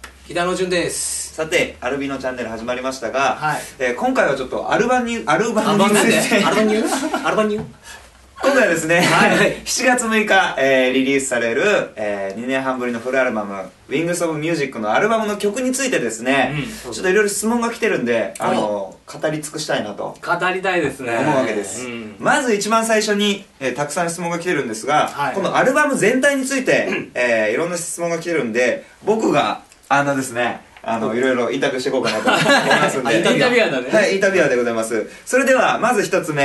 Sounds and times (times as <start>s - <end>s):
Speech: 0.3s - 7.7s, 8.4s - 36.4s.